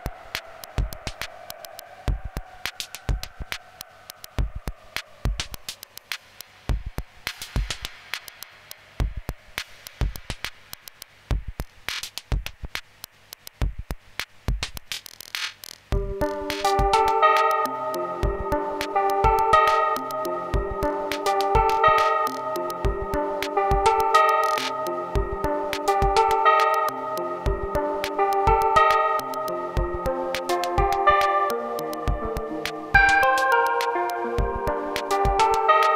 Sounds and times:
Electronica: 0:00.0 - 0:12.8, 0:15.9 - 0:35.9.

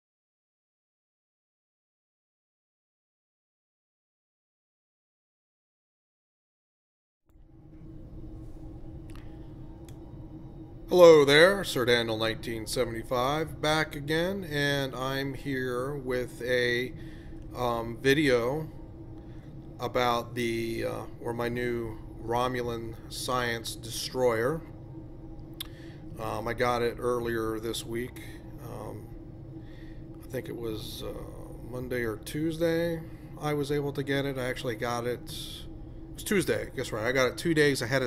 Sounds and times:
Speech: 0:10.9 - 0:18.7, 0:19.8 - 0:24.7, 0:26.2 - 0:29.1, 0:30.2 - 0:38.0.

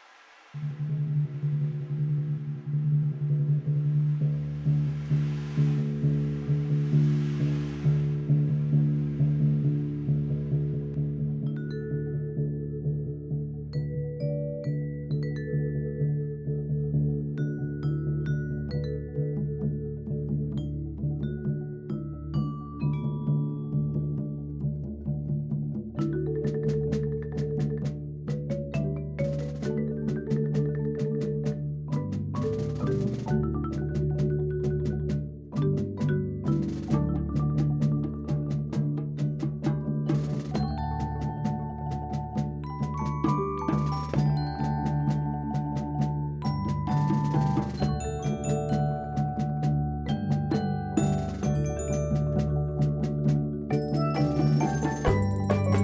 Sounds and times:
Wood block: 0:25.3 - 0:55.8.

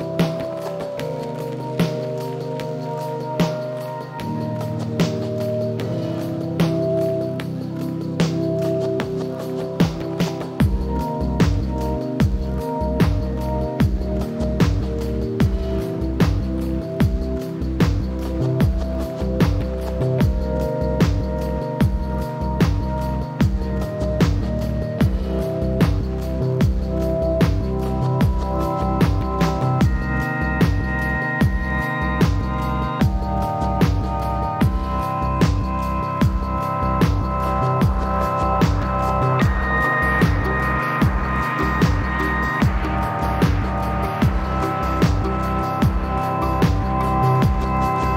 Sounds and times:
Music: 0:00.0 - 0:48.1.

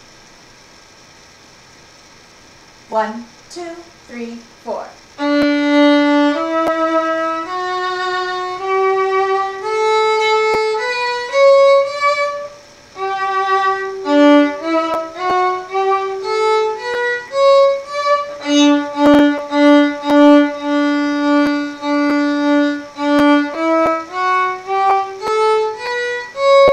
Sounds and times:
Violin, fiddle: 0:05.2 - 0:26.7.

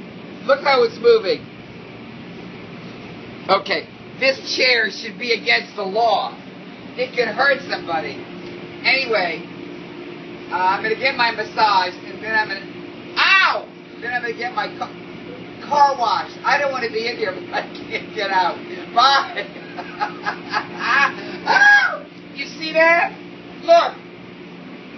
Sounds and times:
Speech: 0:00.4 - 0:01.4, 0:03.5 - 0:06.4, 0:07.0 - 0:08.2, 0:08.8 - 0:09.4, 0:10.5 - 0:15.0, 0:15.6 - 0:19.6, 0:21.5 - 0:24.0.

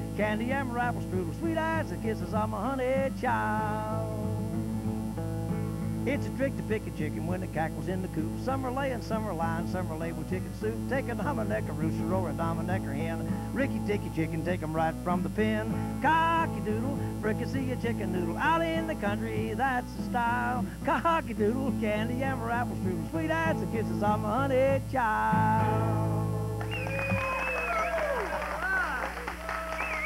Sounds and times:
Country: 0:00.0 - 0:30.0.

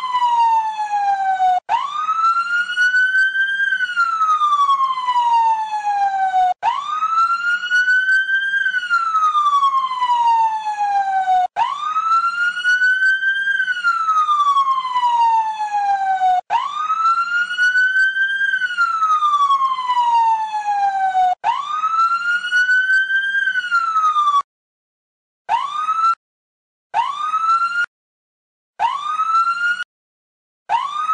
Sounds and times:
Outside, urban or manmade: 0:00.0 - 0:24.5, 0:25.5 - 0:26.2, 0:26.9 - 0:27.9, 0:28.8 - 0:29.9, 0:30.6 - 0:31.1
Police car (siren): 0:00.0 - 0:24.5, 0:25.5 - 0:26.2, 0:27.0 - 0:27.9, 0:28.8 - 0:29.9, 0:30.7 - 0:31.1.

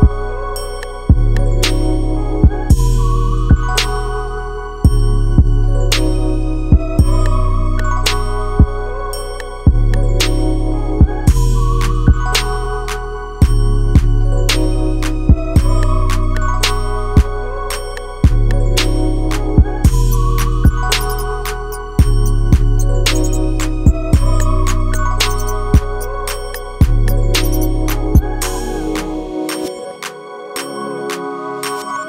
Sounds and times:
Music: 0:00.0 - 0:32.0.

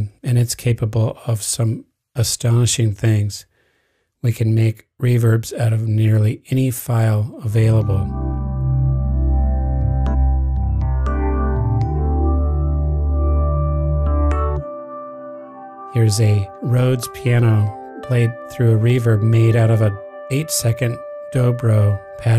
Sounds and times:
Speech: 0:00.0 - 0:03.5, 0:04.2 - 0:08.1, 0:16.0 - 0:22.3
Synthesizer: 0:07.4 - 0:22.3.

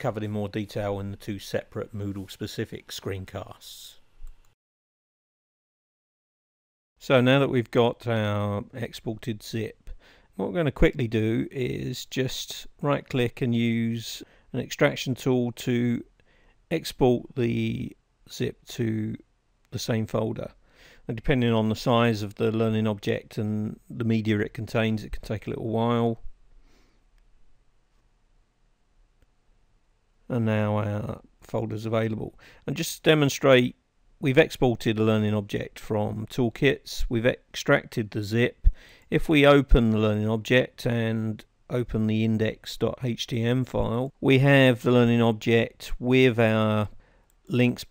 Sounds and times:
Speech: 0:00.0 - 0:04.1, 0:07.0 - 0:16.1, 0:16.7 - 0:26.3, 0:30.3 - 0:47.9.

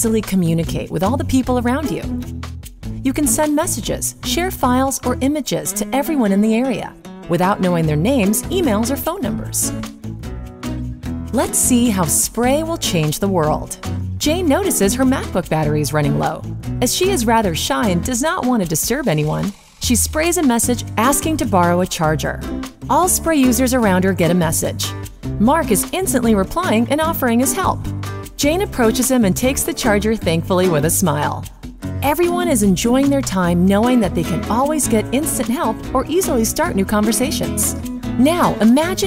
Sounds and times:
Speech: 0:00.0 - 0:02.2, 0:03.1 - 0:09.7, 0:11.4 - 0:27.8, 0:28.4 - 0:39.0
Music: 0:00.0 - 0:39.0.

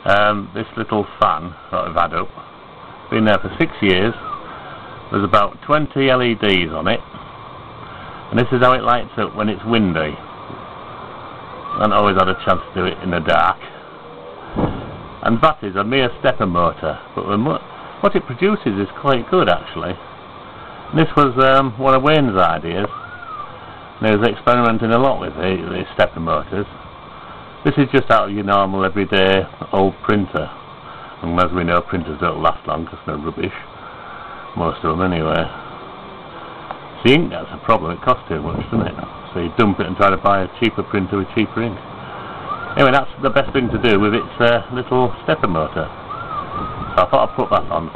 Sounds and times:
Speech: 0:00.0 - 0:02.4, 0:03.1 - 0:04.3, 0:05.1 - 0:07.1, 0:08.3 - 0:10.3, 0:11.8 - 0:13.8, 0:15.2 - 0:20.0, 0:20.9 - 0:23.0, 0:24.0 - 0:26.8, 0:27.6 - 0:30.6, 0:31.2 - 0:33.7, 0:34.6 - 0:35.6, 0:37.0 - 0:41.8, 0:42.8 - 0:46.0, 0:47.0 - 0:47.9.

